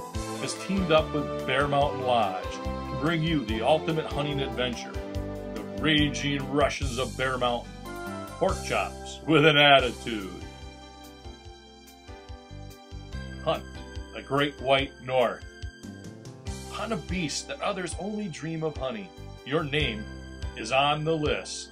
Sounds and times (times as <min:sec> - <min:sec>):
Music: 0:00.0 - 0:21.7
Speech: 0:00.4 - 0:05.0, 0:05.8 - 0:07.7, 0:08.4 - 0:10.5, 0:13.5 - 0:15.4, 0:16.7 - 0:21.7.